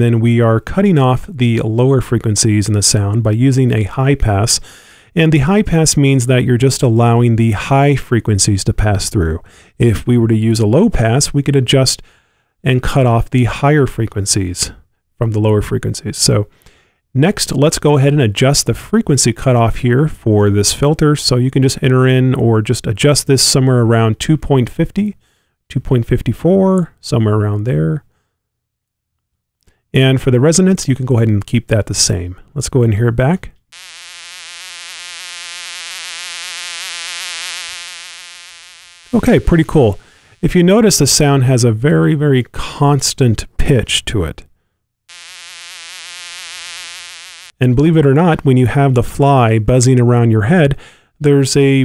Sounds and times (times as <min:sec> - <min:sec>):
Fly, housefly: 0:33.8 - 0:40.3, 0:45.1 - 0:47.6
Mosquito: 0:33.8 - 0:40.5, 0:45.1 - 0:47.6.